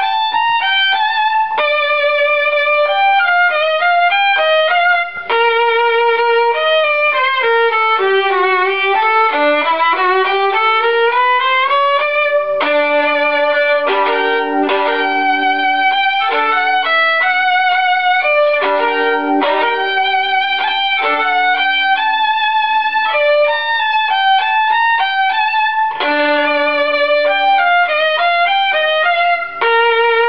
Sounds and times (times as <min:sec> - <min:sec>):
Violin, fiddle: 0:00.0 - 0:30.2.